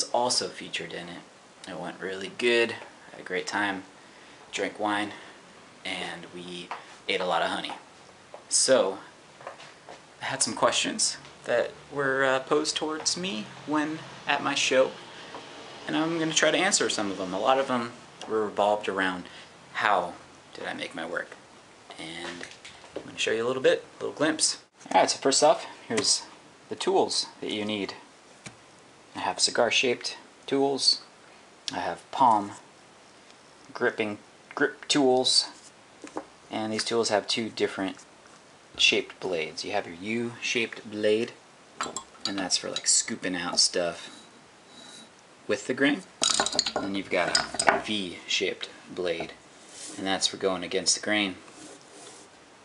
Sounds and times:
Speech: 0.0 - 3.9, 4.5 - 5.2, 5.8 - 7.8, 8.5 - 9.1, 10.2 - 15.0, 15.9 - 28.1, 29.2 - 31.1, 31.7 - 32.6, 33.7 - 35.6, 36.5 - 38.0, 38.8 - 41.4, 42.3 - 44.1, 45.5 - 46.1, 46.8 - 51.4.

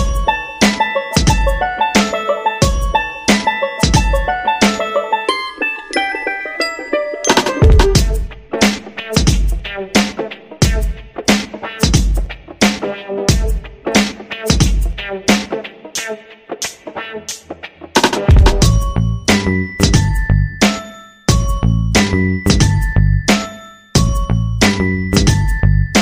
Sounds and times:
Music: 0.0 - 26.0.

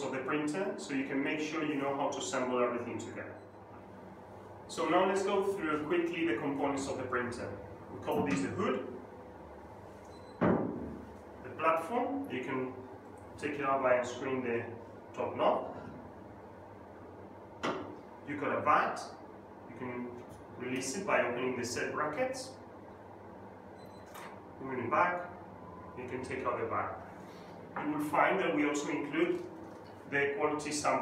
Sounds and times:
Speech: 0.0 - 3.4, 4.7 - 9.0, 11.4 - 12.8, 13.4 - 15.9, 18.3 - 22.6, 24.6 - 25.4, 26.0 - 27.1, 27.8 - 29.5, 30.1 - 31.0.

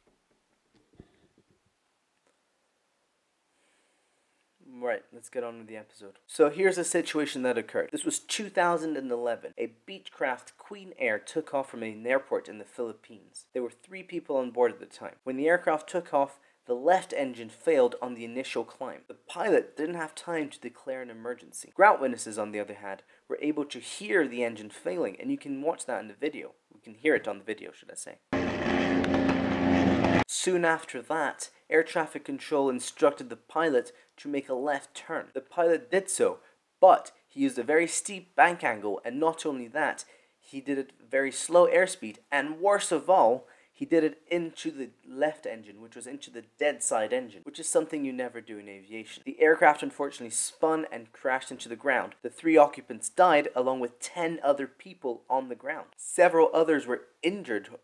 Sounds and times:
Speech: 4.6 - 28.3, 30.3 - 57.8.

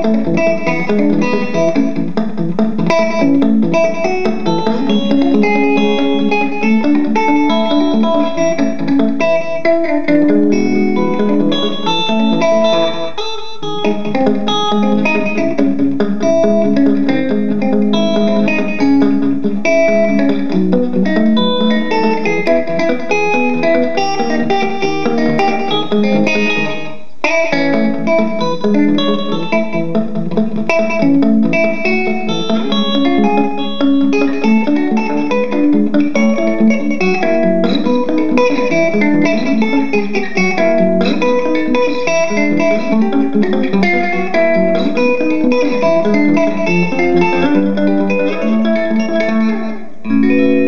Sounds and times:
Electric guitar: 0.0 - 50.6.

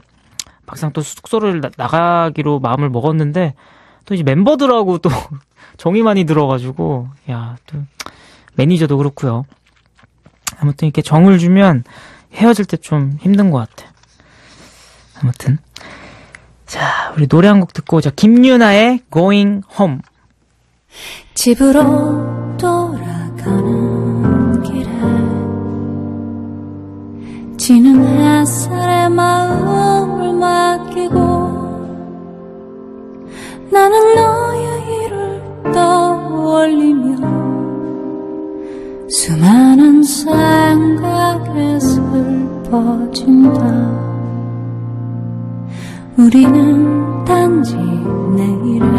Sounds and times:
Speech: 0.7 - 7.9, 8.6 - 9.5, 12.4 - 13.9, 17.1 - 20.1.

